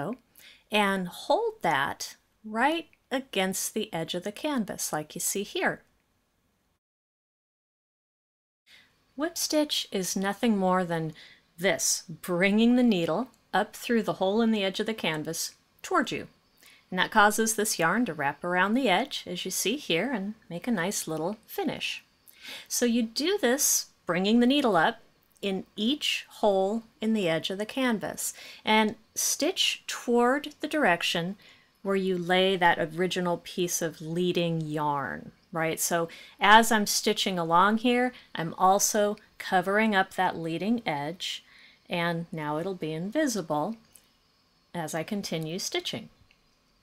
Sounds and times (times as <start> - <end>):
Speech: 0.0 - 5.9, 9.2 - 16.3, 16.9 - 22.0, 22.7 - 43.8, 44.8 - 46.1.